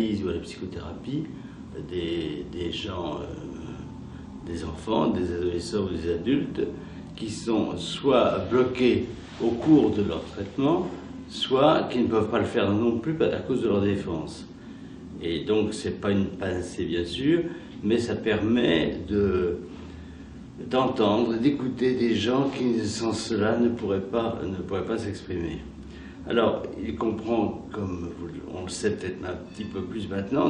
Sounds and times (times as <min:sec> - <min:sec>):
Speech: 0:00.0 - 0:14.6, 0:15.2 - 0:19.7, 0:20.6 - 0:30.5.